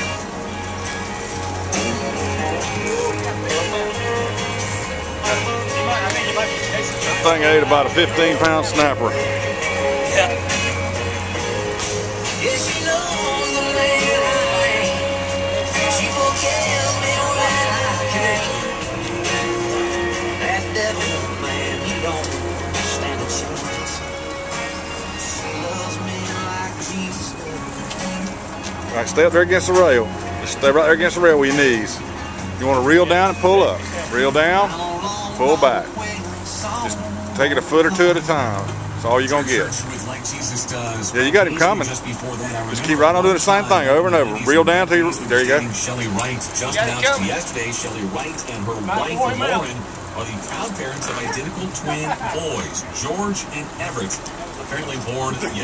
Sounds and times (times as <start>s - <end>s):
Music: 0.0s - 55.6s
Speech: 5.3s - 9.2s, 28.9s - 32.0s, 32.6s - 34.8s, 35.4s - 35.9s, 36.8s - 55.6s.